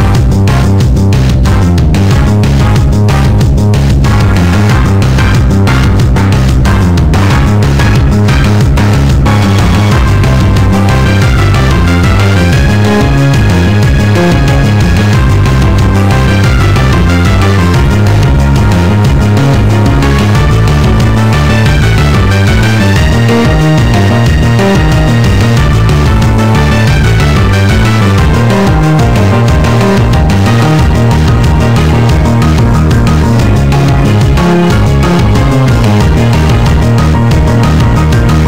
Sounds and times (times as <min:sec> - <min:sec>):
Music: 0:00.0 - 0:38.4.